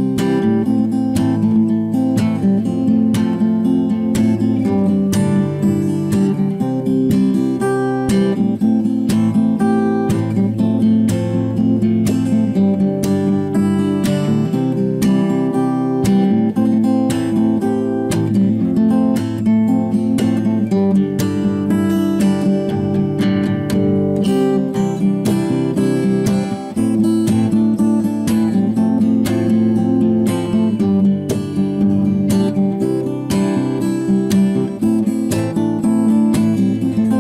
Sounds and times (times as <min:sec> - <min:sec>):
Acoustic guitar: 0:00.0 - 0:37.2
Strum: 0:00.0 - 0:37.2.